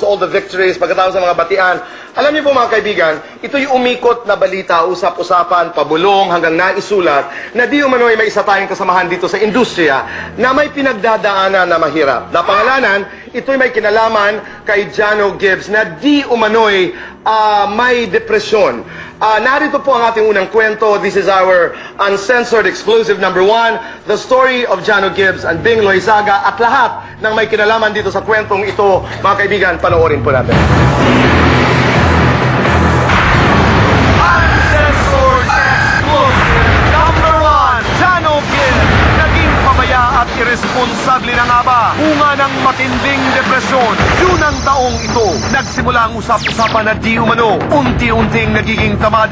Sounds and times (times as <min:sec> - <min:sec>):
Speech: 0:00.0 - 0:30.6, 0:34.2 - 0:49.3.